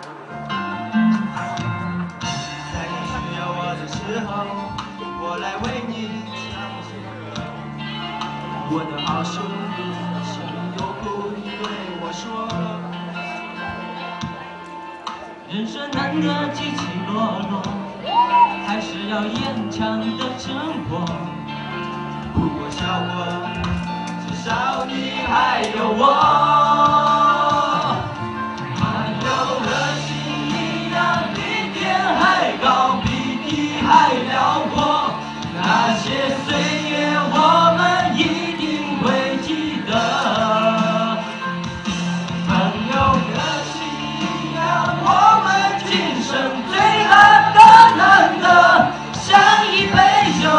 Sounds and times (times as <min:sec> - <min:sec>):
Music: 0:00.0 - 0:50.5
Male singing: 0:02.7 - 0:07.5, 0:08.6 - 0:13.3, 0:15.5 - 0:21.5, 0:22.3 - 0:28.2, 0:28.8 - 0:41.6, 0:42.4 - 0:50.5.